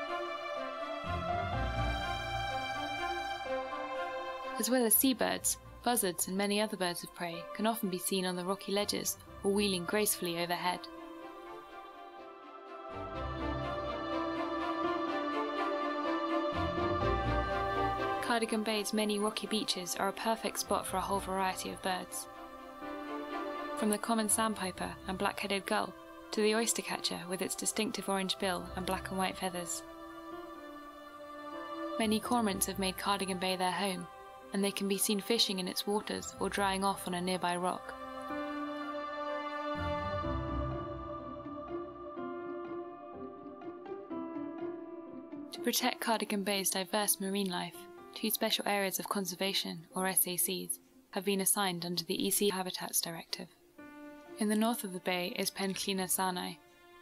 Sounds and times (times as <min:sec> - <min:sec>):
Music: 0:00.0 - 0:57.0
Speech: 0:04.6 - 0:10.9, 0:18.2 - 0:22.3, 0:23.8 - 0:29.8, 0:32.0 - 0:37.9, 0:45.6 - 0:53.5, 0:54.4 - 0:56.6.